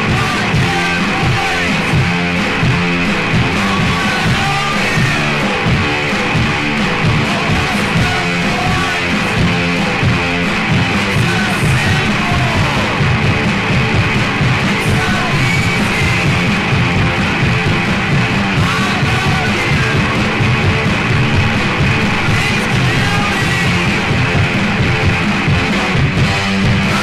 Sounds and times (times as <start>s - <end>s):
Music: 0.0s - 27.0s.